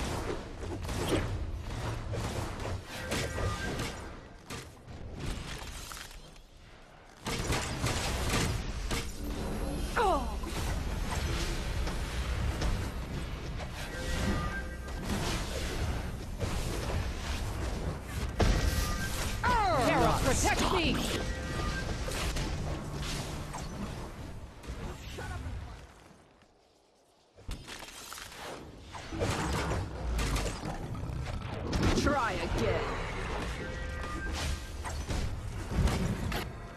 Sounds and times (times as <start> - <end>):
Speech: 19.4 - 21.2.